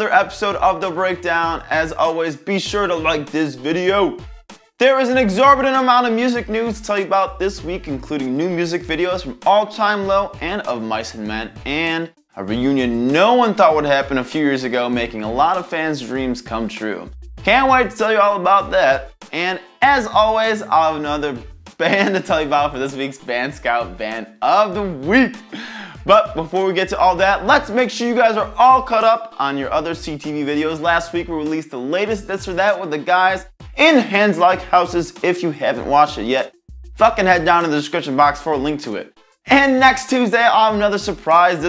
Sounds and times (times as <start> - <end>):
Speech: 0.0 - 4.2, 4.8 - 25.4, 26.0 - 41.6
Music: 0.0 - 41.6.